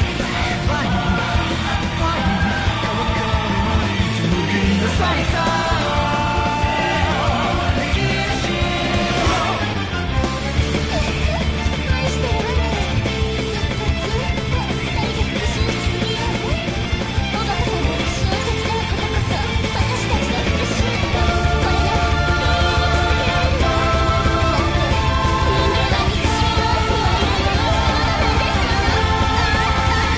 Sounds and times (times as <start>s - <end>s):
Music: 0.0s - 30.1s.